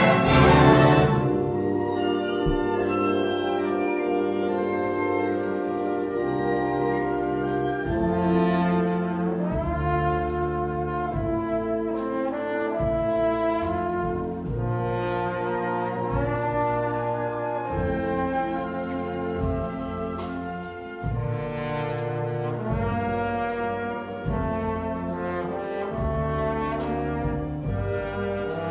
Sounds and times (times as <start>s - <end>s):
Music: 0.0s - 28.7s.